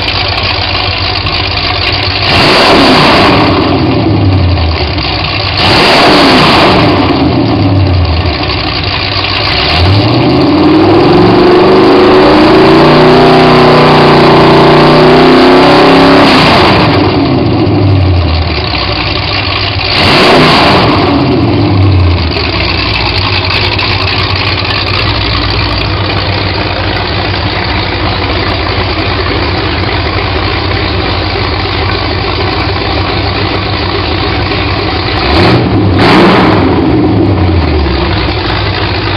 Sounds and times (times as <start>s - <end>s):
Idling: 0.0s - 11.6s, 16.8s - 39.1s
Accelerating, revving, vroom: 2.3s - 4.4s, 5.6s - 7.8s, 9.5s - 17.8s, 19.9s - 22.0s, 35.2s - 37.5s.